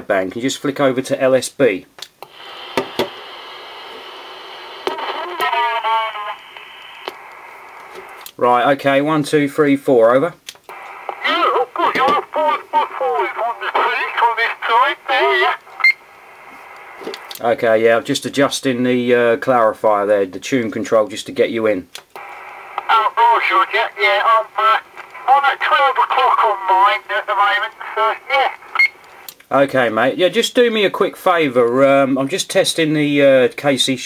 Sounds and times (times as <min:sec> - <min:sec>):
Speech: 0:00.0 - 0:01.9, 0:08.4 - 0:10.4, 0:11.2 - 0:15.6, 0:17.4 - 0:21.9, 0:22.8 - 0:28.6, 0:29.5 - 0:34.0
Radio: 0:02.3 - 0:08.2, 0:10.7 - 0:17.3, 0:22.2 - 0:29.3.